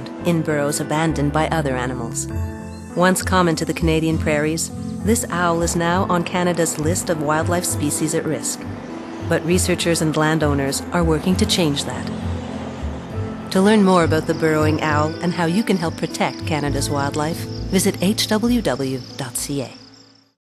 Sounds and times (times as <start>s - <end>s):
Speech: 0.0s - 2.3s, 3.0s - 8.6s, 9.3s - 12.1s, 13.6s - 19.8s
Music: 0.0s - 20.4s.